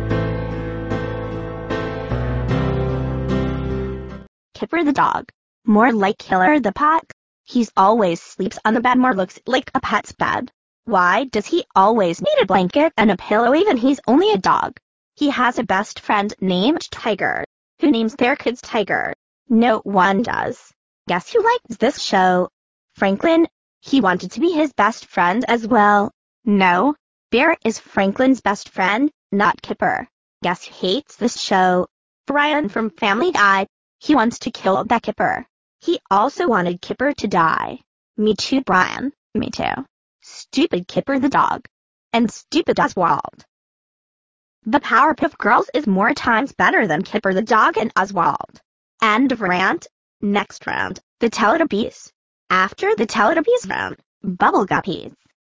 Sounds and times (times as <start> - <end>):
Speech: 4.6 - 43.4, 44.7 - 55.2.